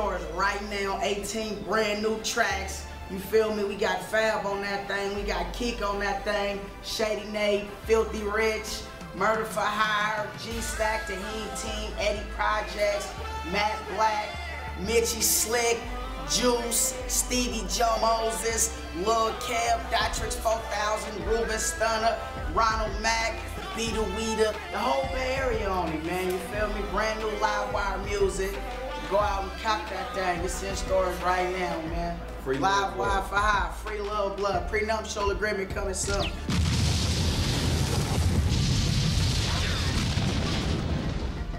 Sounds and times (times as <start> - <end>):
Speech: 0.0 - 36.3
Music: 0.0 - 41.5.